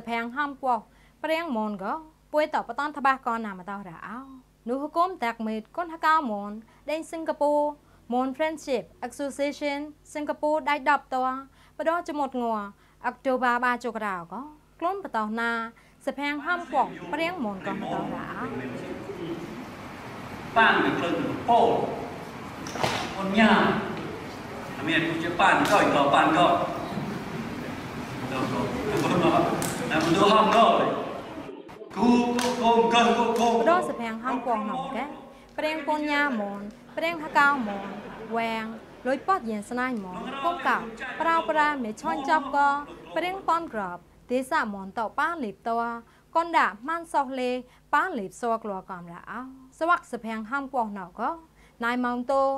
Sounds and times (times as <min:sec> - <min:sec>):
Female speech, woman speaking: 0:00.0 - 0:18.7, 0:33.4 - 0:52.5
Male speech, man speaking: 0:16.4 - 0:19.6, 0:20.6 - 0:22.1, 0:23.2 - 0:24.0, 0:24.8 - 0:26.8, 0:28.3 - 0:31.2, 0:31.9 - 0:36.3, 0:40.1 - 0:43.4.